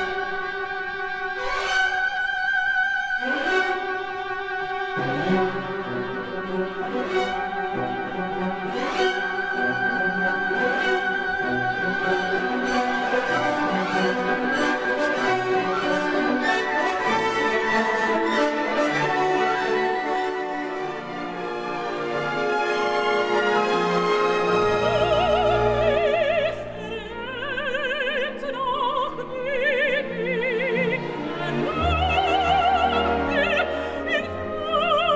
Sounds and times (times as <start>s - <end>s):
Music: 0.0s - 35.1s.